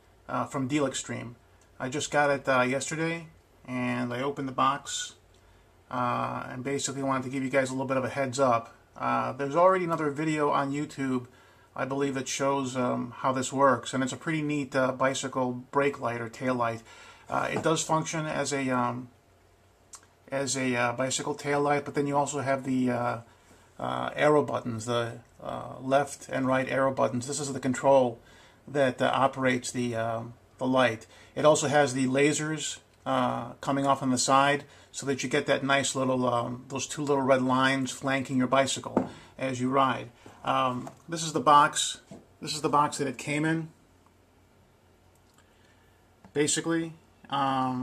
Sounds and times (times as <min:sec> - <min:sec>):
Speech: 0:00.3 - 0:05.2, 0:05.9 - 0:19.2, 0:20.0 - 0:43.8, 0:46.3 - 0:47.8.